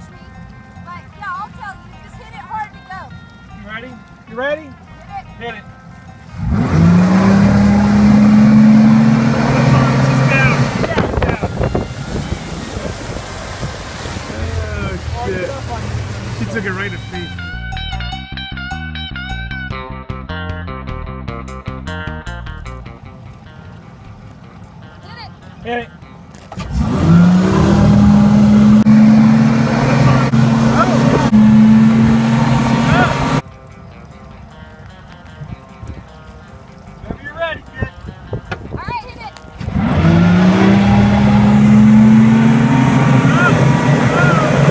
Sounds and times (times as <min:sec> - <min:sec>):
Motorboat, speedboat: 0:06.1 - 0:17.6, 0:26.4 - 0:33.4, 0:39.5 - 0:44.7.